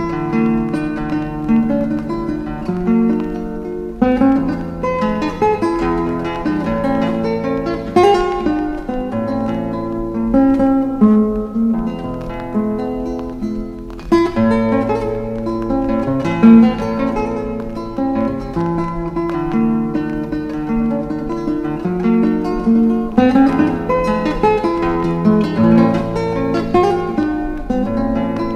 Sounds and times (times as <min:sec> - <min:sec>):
Music: 0:00.0 - 0:28.5.